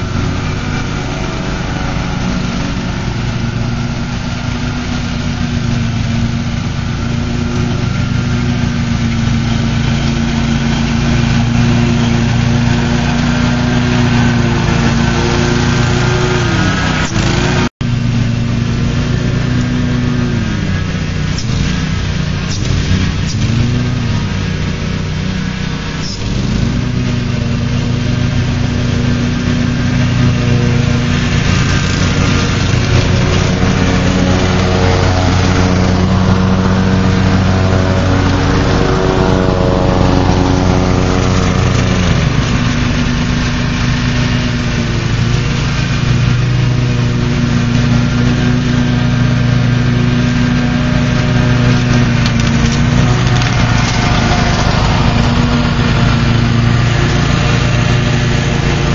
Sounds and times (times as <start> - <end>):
Lawn mower: 0.0 - 58.9.